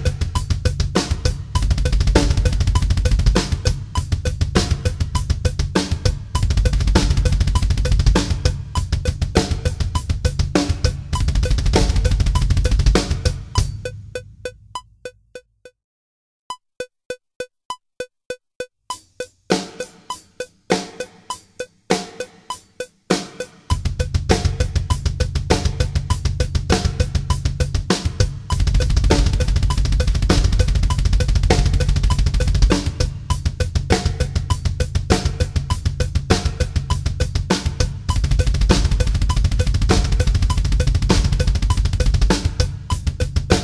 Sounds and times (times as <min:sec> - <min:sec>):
Bass drum: 0:00.0 - 0:14.6, 0:23.7 - 0:43.6
Drum roll: 0:00.0 - 0:14.6, 0:18.9 - 0:43.6
Drum kit: 0:00.0 - 0:15.4, 0:18.6 - 0:43.6
Rimshot: 0:24.3 - 0:42.7.